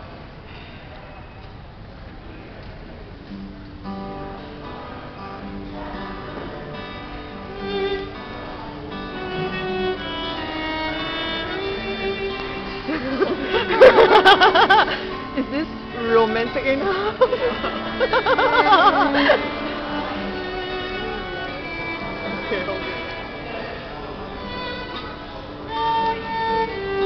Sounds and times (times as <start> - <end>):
Guitar: 0.0 - 27.0
Violin, fiddle: 7.0 - 27.0.